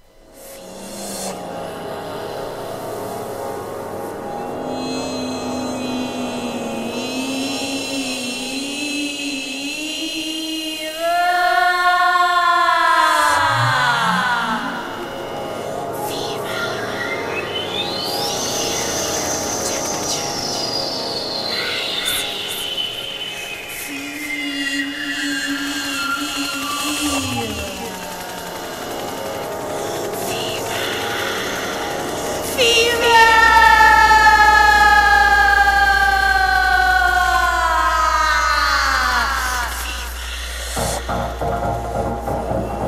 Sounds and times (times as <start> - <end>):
Music: 0.0 - 42.8.